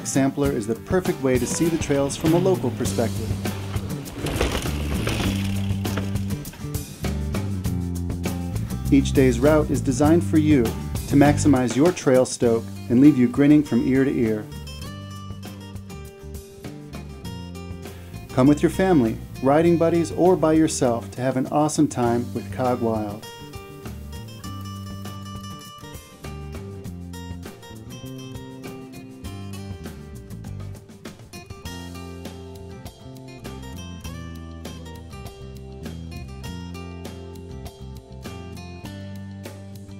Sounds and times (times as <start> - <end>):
Speech: 0.0 - 3.3, 8.9 - 14.5, 18.3 - 23.3
Music: 0.0 - 39.9.